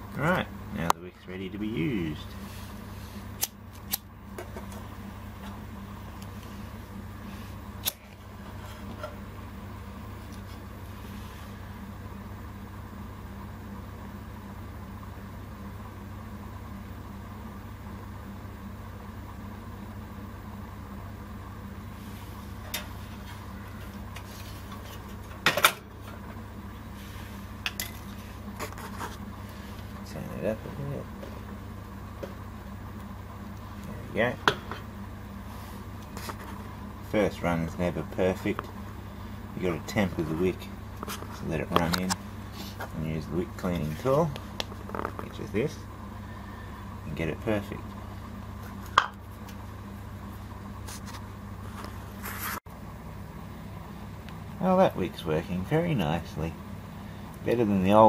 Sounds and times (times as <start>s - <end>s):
Speech: 0.2s - 2.4s, 30.0s - 31.1s, 33.8s - 34.5s, 37.1s - 38.7s, 39.6s - 40.7s, 41.4s - 42.2s, 42.9s - 44.4s, 45.2s - 45.9s, 47.0s - 47.9s, 54.6s - 56.6s, 57.4s - 58.0s.